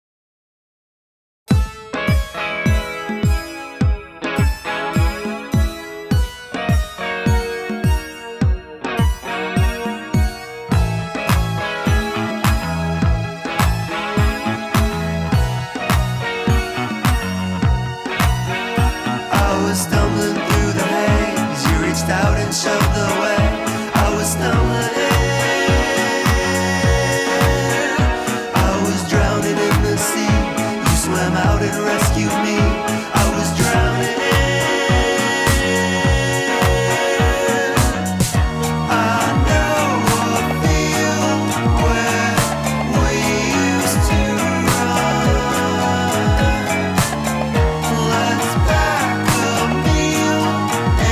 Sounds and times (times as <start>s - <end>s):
Music: 1.5s - 51.1s.